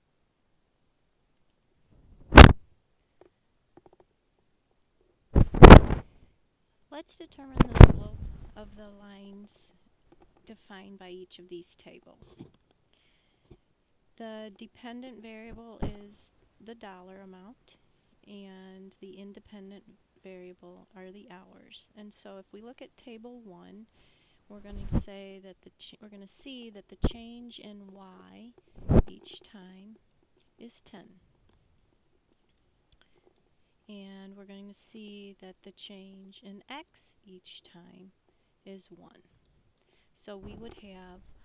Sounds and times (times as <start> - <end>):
Speech: 6.9 - 9.8, 10.4 - 12.6, 14.2 - 23.9, 24.5 - 30.0, 30.6 - 31.2, 33.9 - 39.3, 40.2 - 41.4.